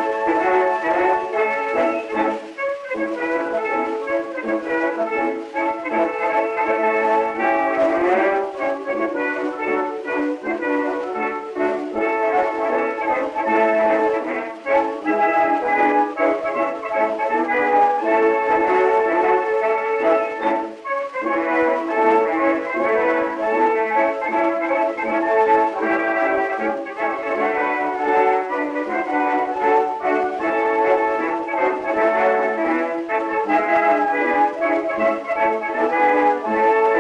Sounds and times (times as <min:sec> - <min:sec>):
Blues: 0:00.0 - 0:37.0.